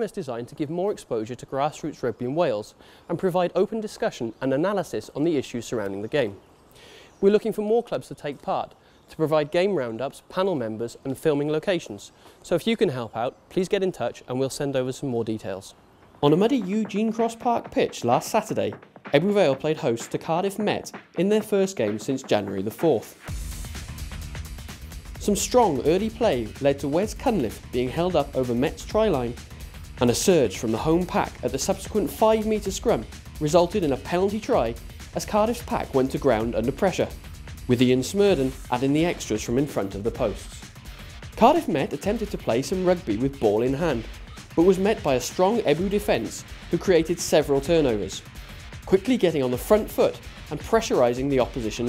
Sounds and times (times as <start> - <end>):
Speech: 0.0 - 6.4, 7.2 - 23.2, 25.2 - 29.4, 30.0 - 40.6, 41.4 - 48.2, 48.9 - 51.8.